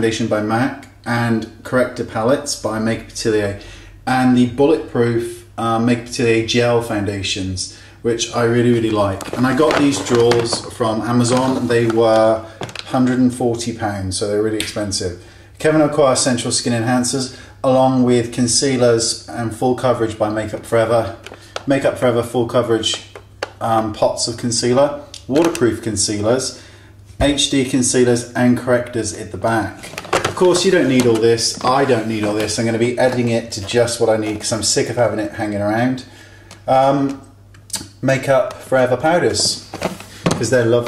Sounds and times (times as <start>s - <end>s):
Speech: 0.0s - 26.6s, 27.2s - 36.1s, 36.7s - 39.7s, 40.3s - 40.8s.